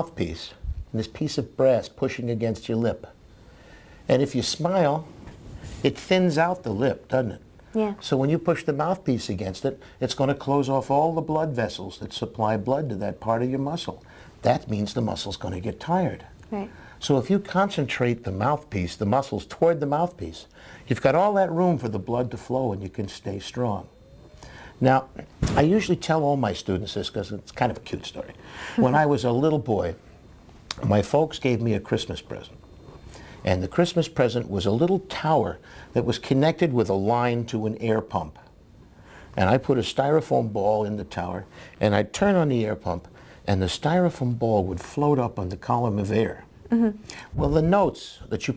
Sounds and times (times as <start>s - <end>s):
Conversation: 0.0s - 48.5s.